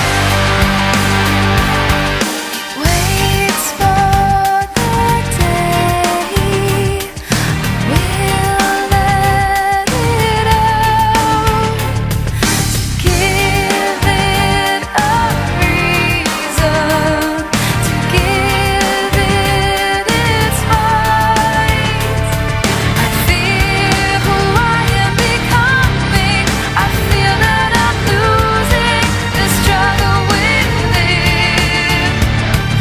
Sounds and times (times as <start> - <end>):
Music: 0.0 - 32.8.